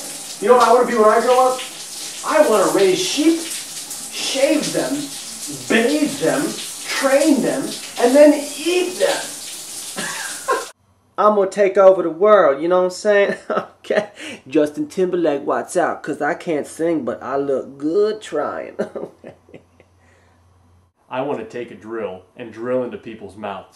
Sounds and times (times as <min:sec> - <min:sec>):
Water: 0:00.0 - 0:10.8
Water tap, faucet: 0:00.0 - 0:10.8.